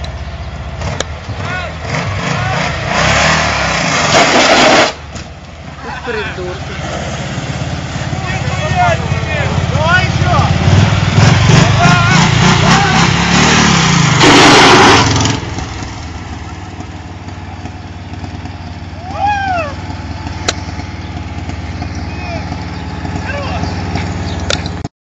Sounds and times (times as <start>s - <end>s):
Car: 0.0s - 24.9s
Speech: 8.2s - 10.6s, 11.6s - 13.1s, 23.2s - 23.7s.